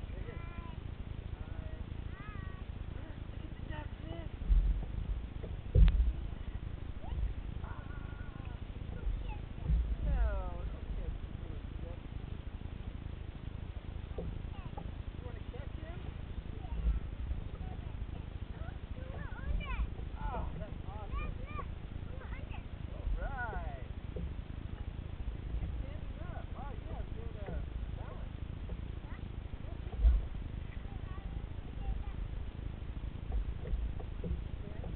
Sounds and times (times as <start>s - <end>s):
Rowboat, canoe, kayak: 0.0s - 34.9s.